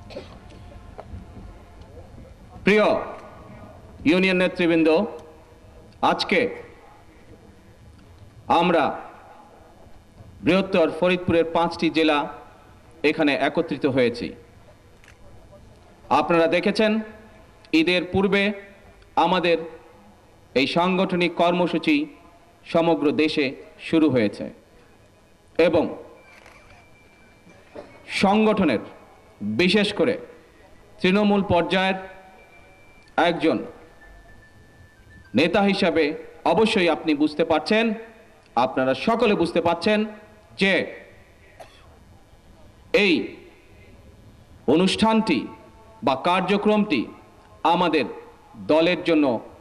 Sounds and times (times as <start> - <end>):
Narration, monologue: 1.8 - 41.9, 42.6 - 49.6
Male speech, man speaking: 2.6 - 3.2, 4.0 - 5.2, 6.0 - 6.8, 8.5 - 9.1, 10.4 - 12.4, 13.0 - 14.4, 16.1 - 17.2, 17.8 - 19.8, 20.6 - 24.6, 25.6 - 26.1, 28.1 - 30.4, 31.0 - 32.1, 33.2 - 33.8, 35.4 - 41.1, 42.9 - 43.4, 44.7 - 49.5.